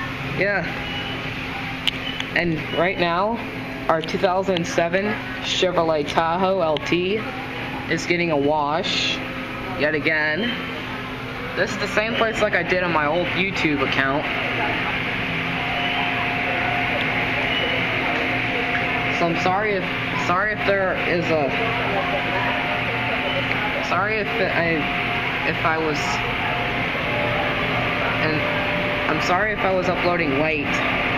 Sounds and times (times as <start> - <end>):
Speech: 0.0 - 0.8, 1.6 - 10.9, 11.5 - 30.9.